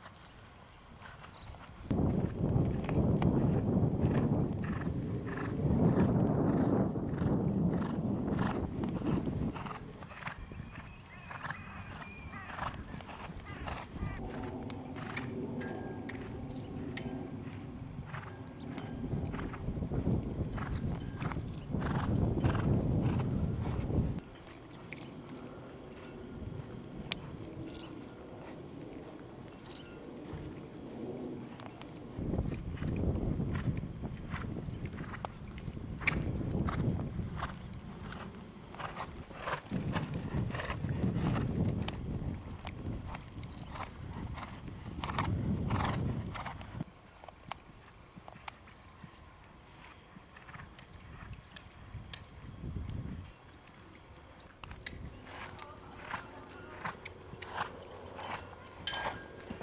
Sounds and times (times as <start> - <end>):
Clip-clop: 0.0 - 59.6.